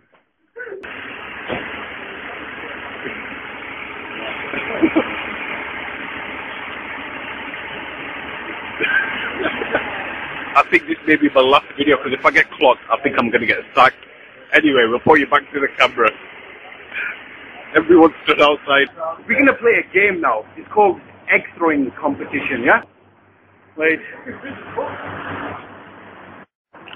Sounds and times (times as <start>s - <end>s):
Speech: 10.6s - 22.9s, 23.8s - 24.5s.